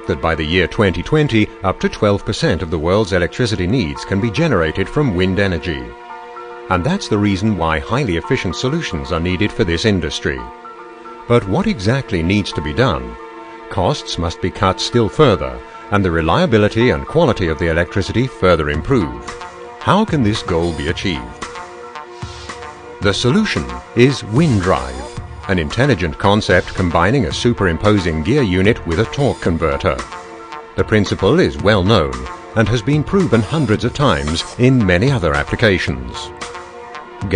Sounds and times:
Speech: 0.0s - 6.0s, 6.7s - 10.5s, 11.3s - 21.4s, 23.0s - 30.1s, 30.8s - 36.3s
Music: 0.0s - 37.3s.

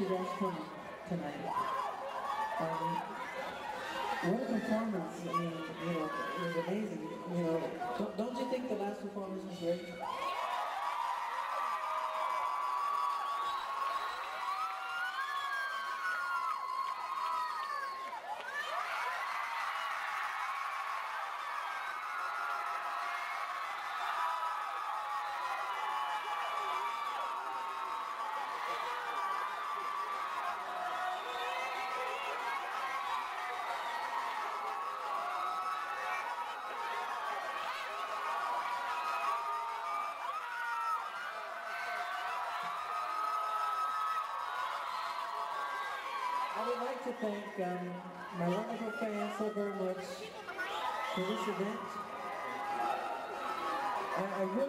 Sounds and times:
Male speech, man speaking: 0.0s - 1.5s, 4.2s - 10.0s, 46.6s - 50.2s, 51.2s - 52.0s, 54.2s - 54.6s.

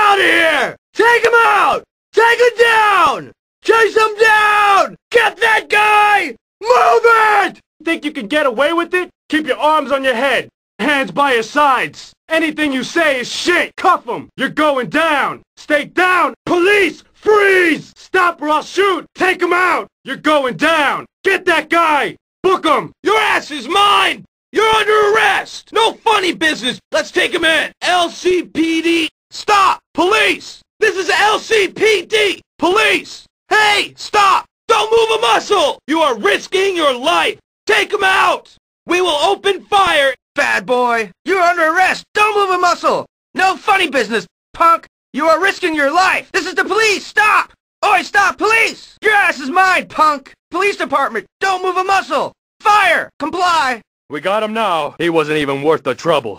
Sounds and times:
Speech: 0.0s - 56.3s.

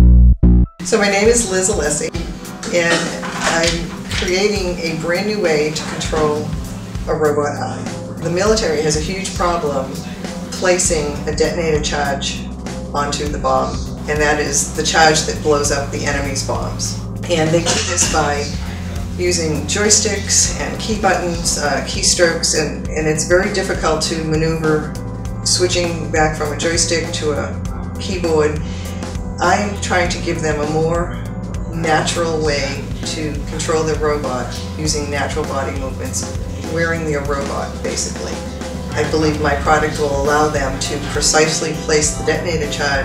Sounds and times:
Music: 0.0s - 43.0s
Speech: 0.8s - 43.0s.

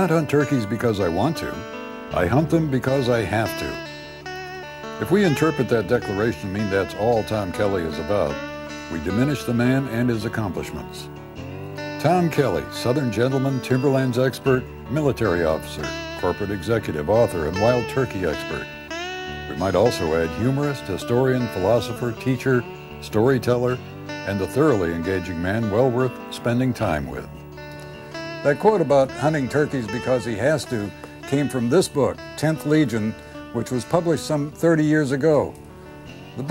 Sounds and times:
Speech: 0.0s - 1.6s, 2.2s - 3.8s, 5.0s - 11.1s, 12.0s - 18.7s, 19.5s - 27.4s, 28.4s - 35.6s
Music: 0.0s - 36.5s.

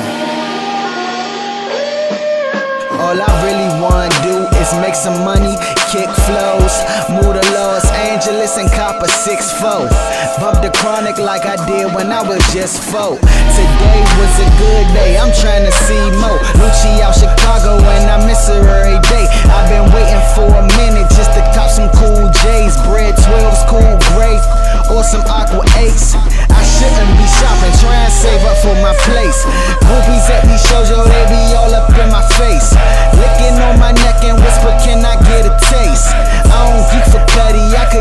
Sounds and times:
Music: 0.0s - 38.0s.

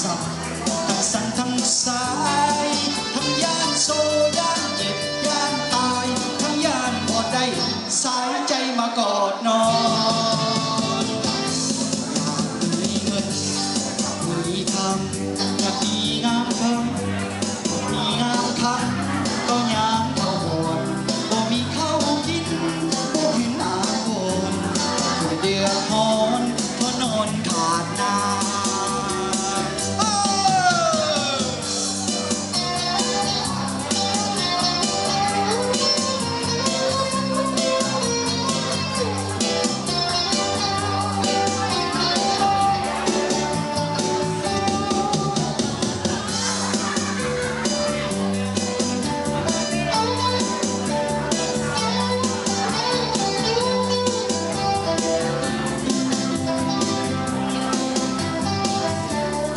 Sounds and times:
Male singing: 0.0s - 17.2s, 17.8s - 31.7s
Music: 0.0s - 59.5s.

